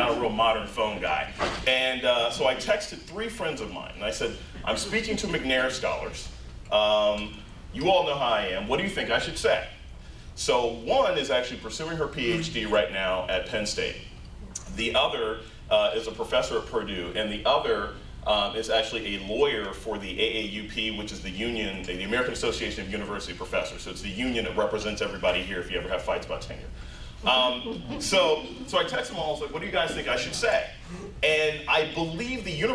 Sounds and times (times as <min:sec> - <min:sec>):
Male speech, man speaking: 0:00.0 - 0:09.7, 0:10.4 - 0:32.7.